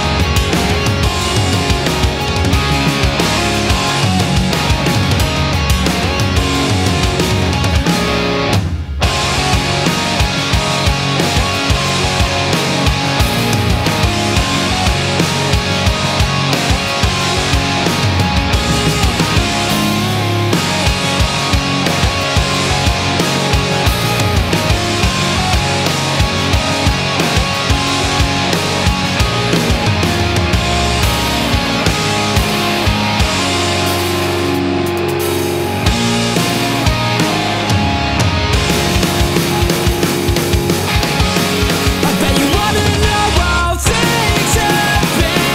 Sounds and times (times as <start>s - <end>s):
Rhythm and blues: 0.0s - 45.5s.